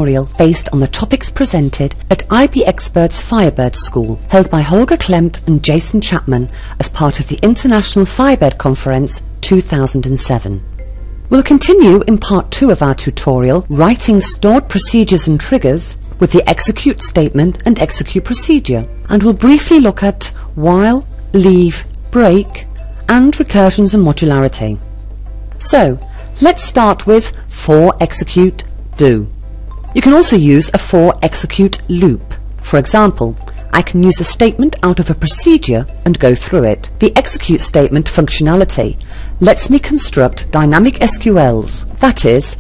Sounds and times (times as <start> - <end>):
Speech: 0.0 - 10.6, 11.4 - 24.8, 25.6 - 29.3, 30.0 - 42.6.